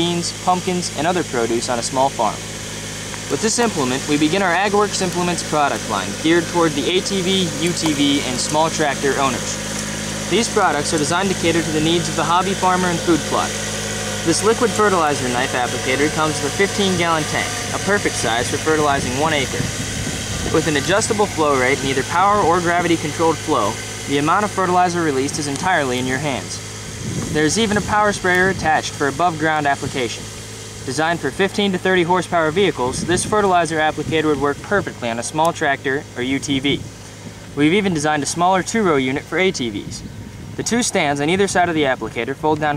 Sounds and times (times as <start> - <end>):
Speech: 0.0 - 2.4, 3.3 - 9.6, 10.3 - 13.6, 14.2 - 19.7, 20.5 - 26.6, 27.3 - 30.2, 30.9 - 36.9, 37.6 - 40.0, 40.6 - 42.7.